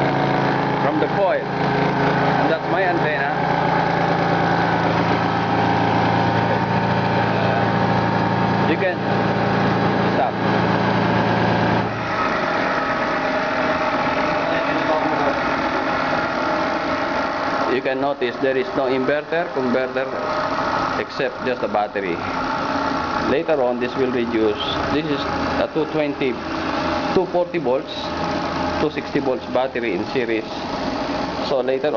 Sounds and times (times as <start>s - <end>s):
Speech: 0.8s - 1.5s, 2.4s - 3.4s, 8.7s - 9.0s, 10.2s - 10.4s, 14.4s - 15.4s, 17.7s - 20.2s, 21.0s - 22.2s, 23.3s - 26.4s, 27.2s - 28.1s, 28.8s - 30.6s, 31.4s - 31.9s.